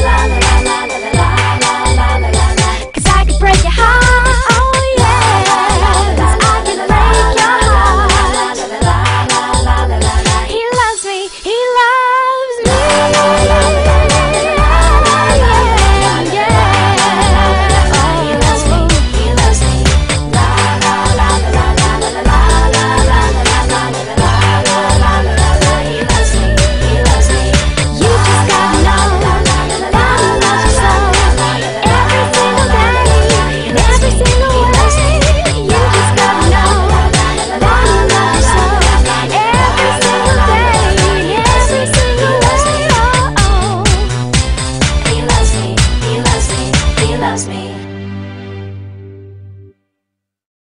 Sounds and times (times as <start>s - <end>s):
Pop music: 0.0s - 48.8s.